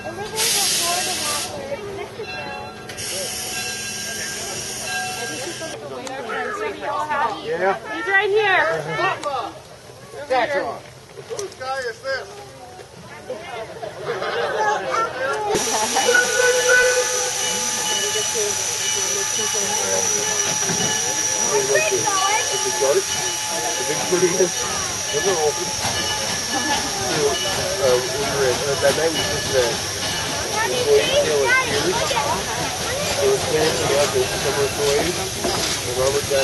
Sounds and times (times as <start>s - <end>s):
Train: 0.0s - 11.1s, 11.7s - 36.4s.